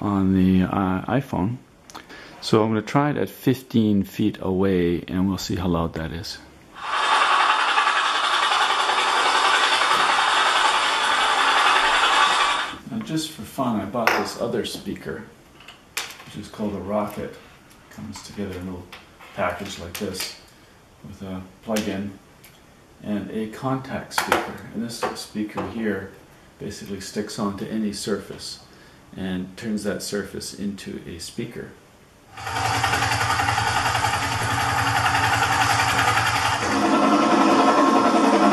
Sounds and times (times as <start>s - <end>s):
Speech: 0.0s - 1.7s, 2.4s - 6.5s, 12.8s - 15.4s, 16.3s - 20.4s, 21.0s - 22.2s, 23.0s - 31.8s.